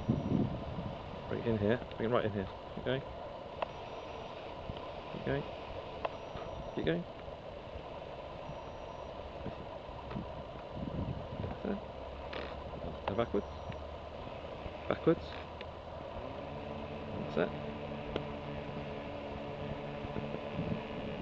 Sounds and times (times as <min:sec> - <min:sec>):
Speech: 0:01.3 - 0:03.0, 0:13.1 - 0:13.5, 0:14.9 - 0:15.4.